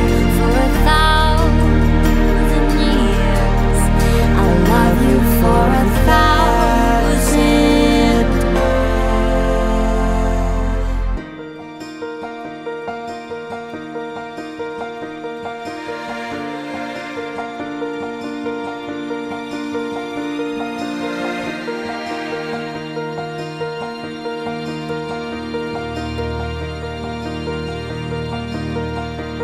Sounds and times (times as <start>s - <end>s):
Background music: 0.0s - 29.4s.